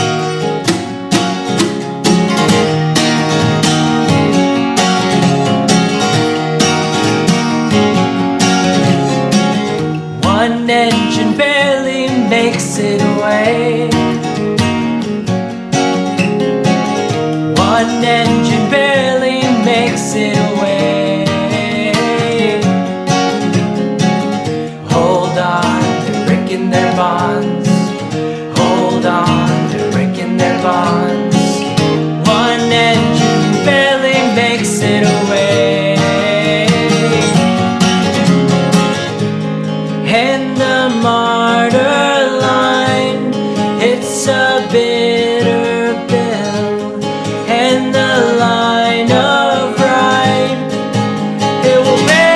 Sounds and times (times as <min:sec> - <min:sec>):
Music: 0:00.0 - 0:52.3.